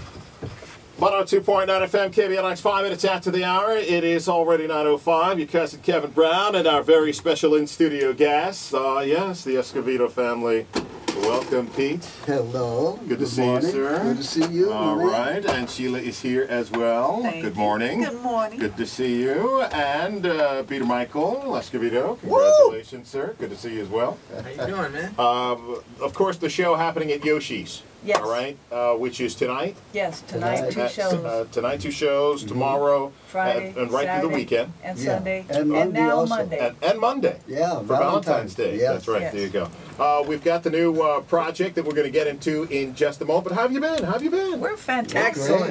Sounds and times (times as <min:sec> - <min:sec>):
Speech: 0:28.1 - 0:45.7.